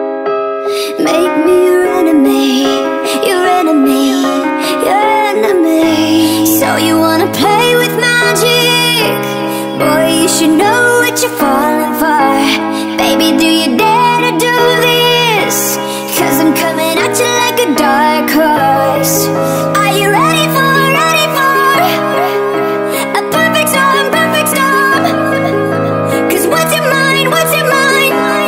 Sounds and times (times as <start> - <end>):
Music: 0.0 - 28.4.